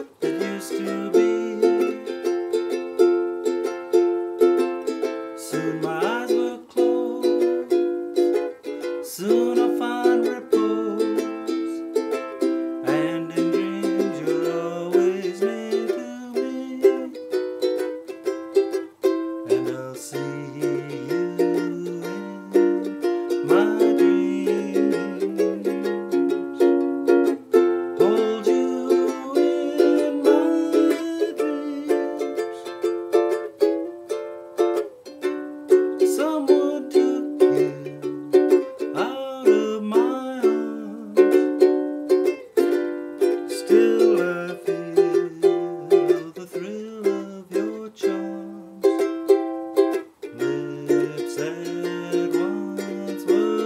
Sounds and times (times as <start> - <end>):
Inside, small room: 0.0 - 53.6
Music: 0.0 - 53.6.